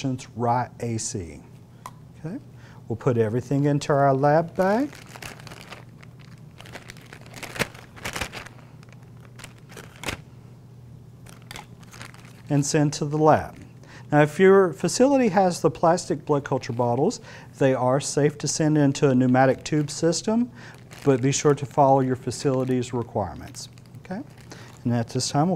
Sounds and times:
Speech: 0.0s - 1.5s, 2.2s - 5.0s, 12.5s - 25.5s.

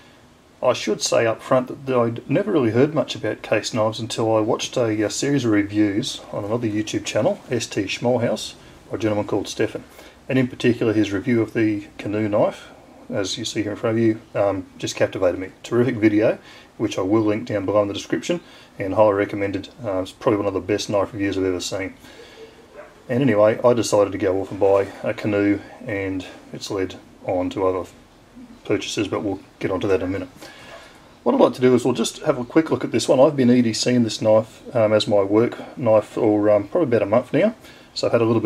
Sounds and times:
Speech: 0.6s - 22.0s, 23.1s - 30.4s, 31.2s - 38.4s.

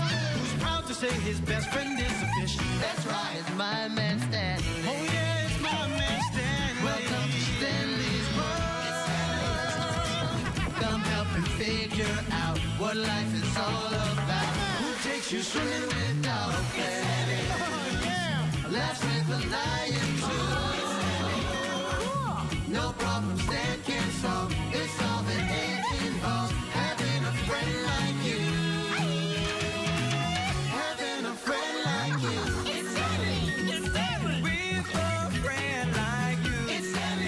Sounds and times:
Music: 0.0s - 37.2s.

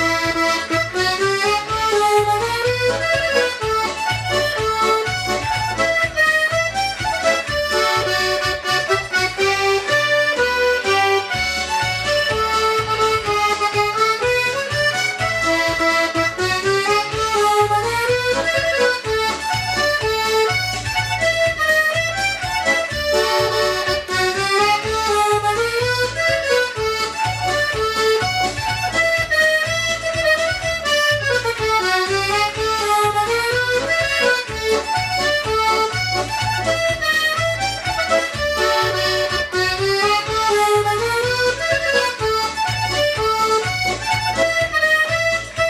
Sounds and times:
Accordion: 0.0s - 45.7s
Harmonica: 0.0s - 45.7s.

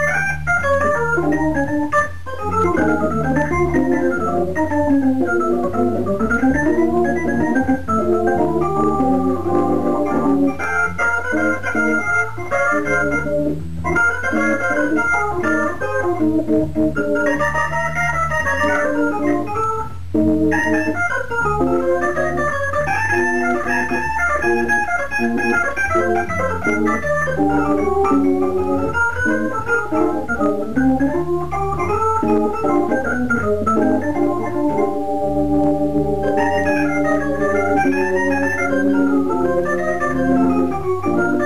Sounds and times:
Electronic organ: 0.0s - 41.4s.

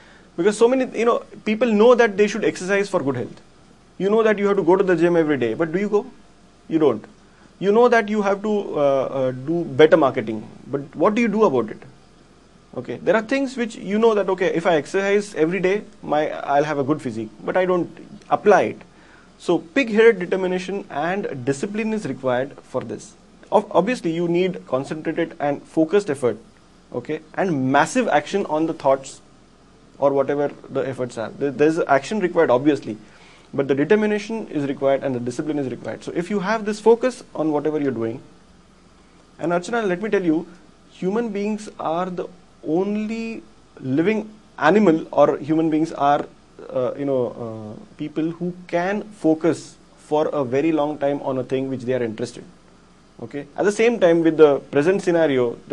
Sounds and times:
Speech: 0.4s - 3.4s, 4.0s - 12.0s, 12.7s - 29.2s, 30.0s - 33.0s, 33.6s - 38.3s, 39.4s - 52.6s, 53.2s - 55.7s.

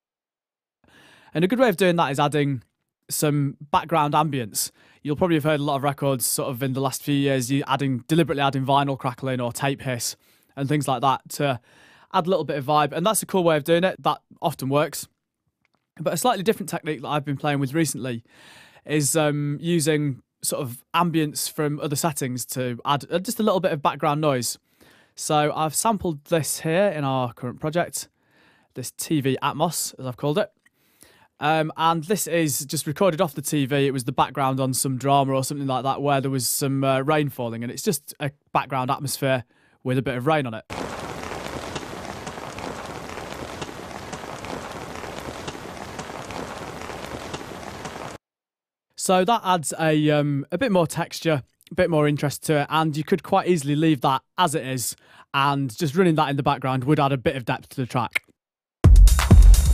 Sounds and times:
Speech: 1.4s - 15.1s, 16.0s - 18.2s, 18.9s - 24.6s, 25.2s - 28.1s, 28.8s - 30.6s, 31.4s - 40.7s, 49.0s - 58.3s.

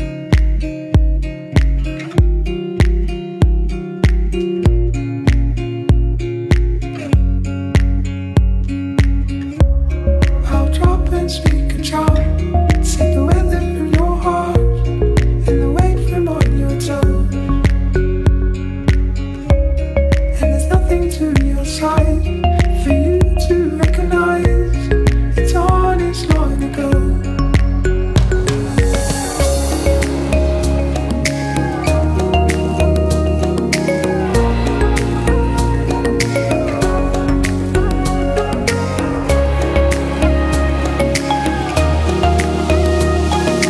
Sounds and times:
Music: 0.0s - 43.6s.

